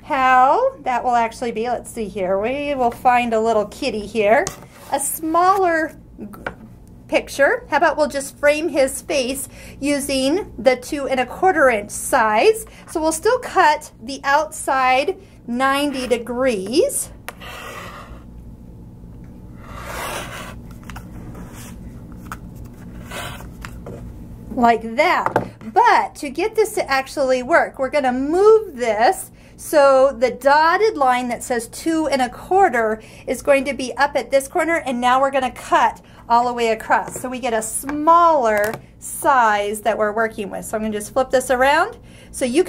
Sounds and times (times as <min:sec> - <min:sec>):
Speech: 0:00.0 - 0:06.5, 0:07.1 - 0:17.1, 0:24.5 - 0:42.6.